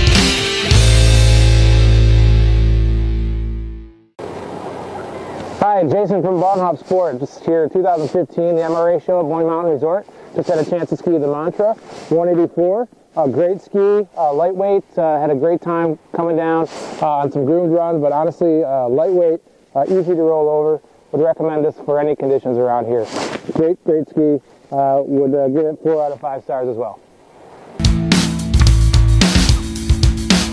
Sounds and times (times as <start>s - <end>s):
Music: 0.0s - 4.1s, 27.8s - 30.5s
Speech: 5.6s - 27.0s.